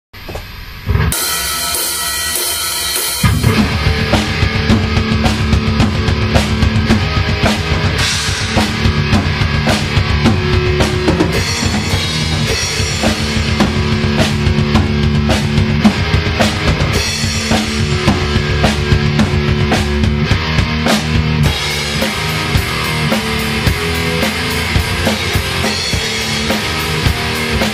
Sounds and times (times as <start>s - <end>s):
Drum kit: 0.2s - 27.7s
Bass drum: 0.9s - 27.7s.